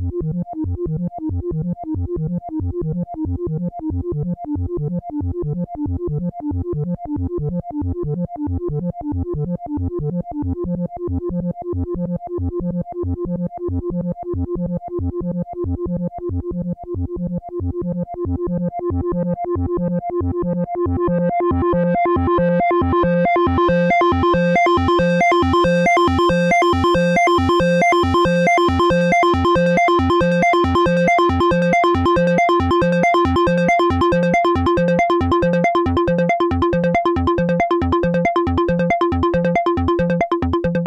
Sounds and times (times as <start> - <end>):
Synthesizer: 0.0 - 40.8.